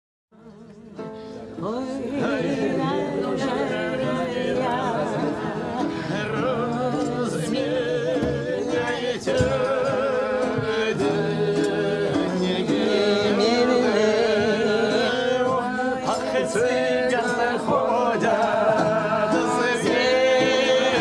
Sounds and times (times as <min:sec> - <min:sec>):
A capella: 0:00.4 - 0:21.0.